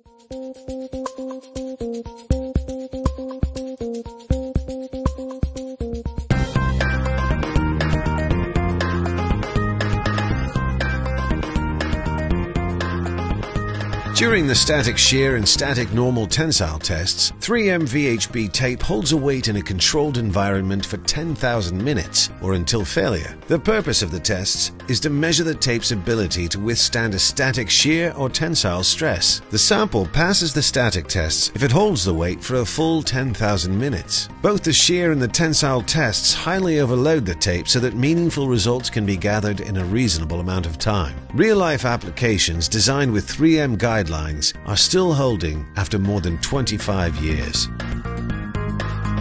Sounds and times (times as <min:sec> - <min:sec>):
Music: 0:00.0 - 0:49.2
Speech: 0:14.2 - 0:47.7.